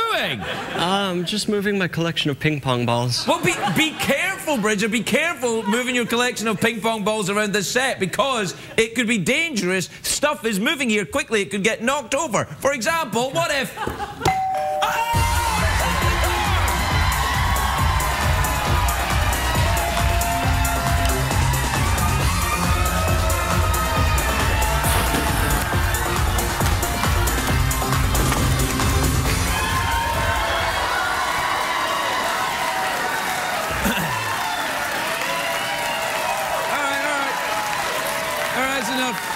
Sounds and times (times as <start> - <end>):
Music: 15.1 - 31.2.